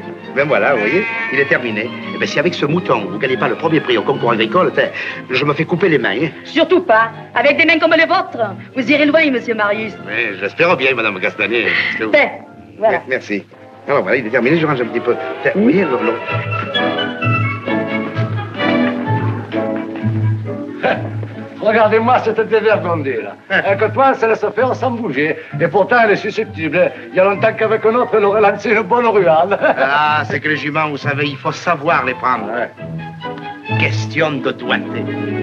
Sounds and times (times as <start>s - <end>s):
Music: 0.0s - 35.4s.